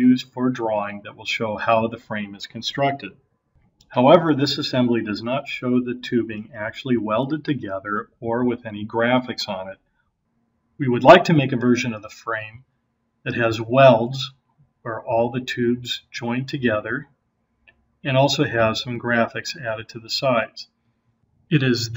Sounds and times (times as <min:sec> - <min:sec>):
Speech: 0:00.0 - 0:03.1, 0:03.9 - 0:09.8, 0:10.8 - 0:12.6, 0:13.3 - 0:14.3, 0:14.9 - 0:17.0, 0:18.1 - 0:20.6, 0:21.5 - 0:21.9.